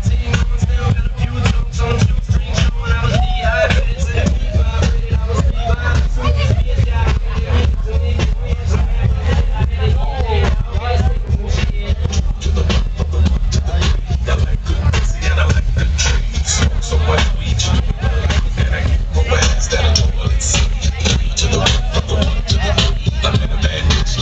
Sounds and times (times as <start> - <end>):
Music: 0.0 - 24.2
Speech: 0.0 - 24.2.